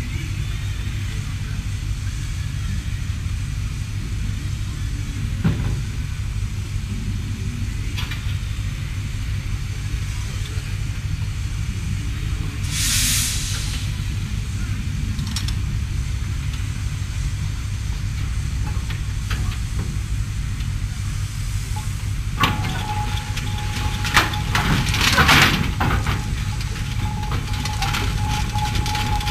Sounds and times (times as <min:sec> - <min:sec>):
Heavy engine (low frequency): 0:00.0 - 0:29.3.